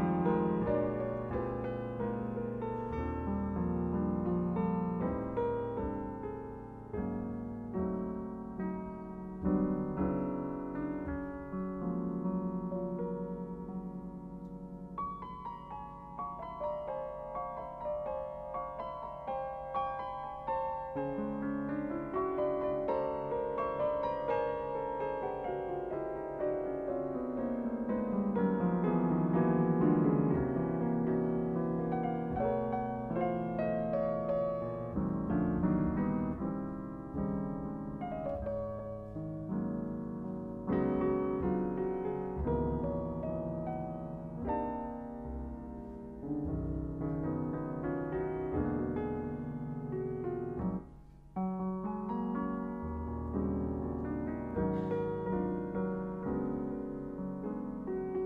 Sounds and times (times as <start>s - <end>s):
Piano: 0.0s - 58.2s.